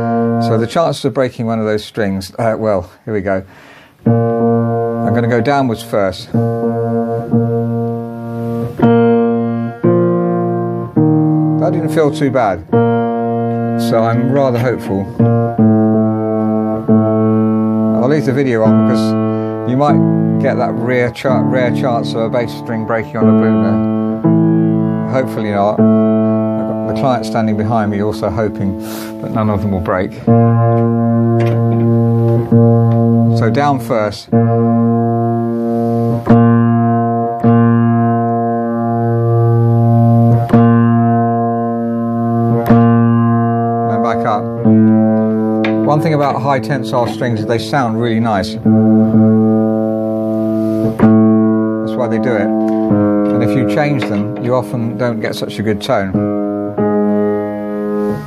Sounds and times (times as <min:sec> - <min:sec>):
Piano: 0:00.0 - 0:01.7, 0:03.9 - 0:58.2
Inside, small room: 0:00.0 - 0:58.2
Speech: 0:00.4 - 0:03.5, 0:05.1 - 0:06.4, 0:11.6 - 0:12.6, 0:13.8 - 0:15.1, 0:18.0 - 0:23.8, 0:25.1 - 0:25.8, 0:26.7 - 0:30.2, 0:33.3 - 0:34.3, 0:43.9 - 0:44.5, 0:45.9 - 0:48.6, 0:51.9 - 0:52.5, 0:53.4 - 0:56.2.